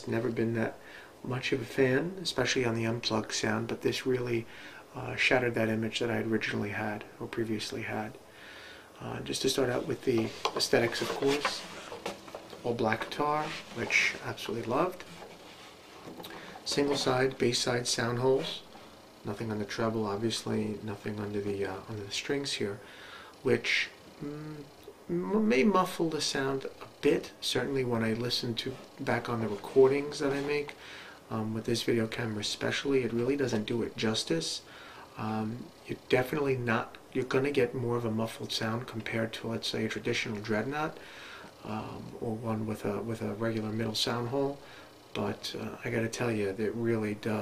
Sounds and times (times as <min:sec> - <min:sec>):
Speech: 0:00.0 - 0:08.2, 0:09.0 - 0:11.8, 0:12.5 - 0:15.2, 0:16.6 - 0:22.8, 0:23.4 - 0:41.0, 0:41.6 - 0:47.4.